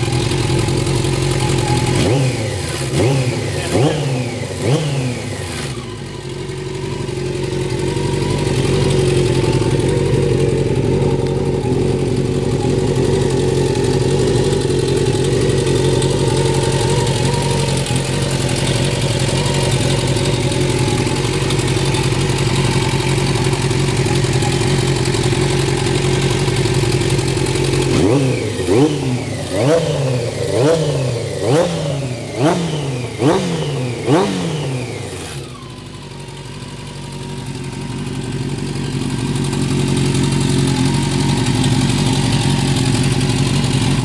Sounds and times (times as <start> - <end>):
Vehicle: 0.0 - 44.0
Accelerating, revving, vroom: 2.0 - 5.9, 27.9 - 35.4.